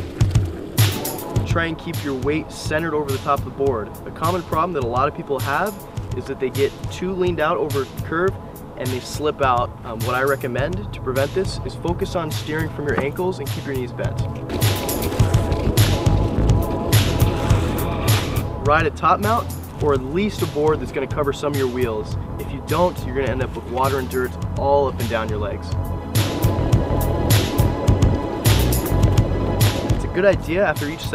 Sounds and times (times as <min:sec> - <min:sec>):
Music: 0:00.0 - 0:31.1
Speech: 0:01.5 - 0:14.2, 0:18.6 - 0:25.8, 0:30.0 - 0:31.1.